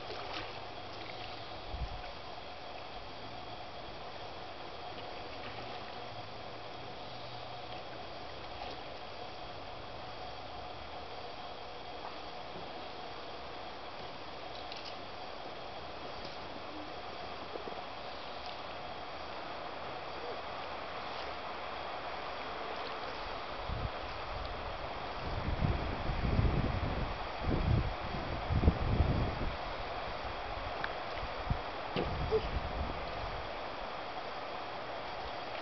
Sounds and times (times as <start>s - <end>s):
Boat, Water vehicle: 0.0s - 35.6s.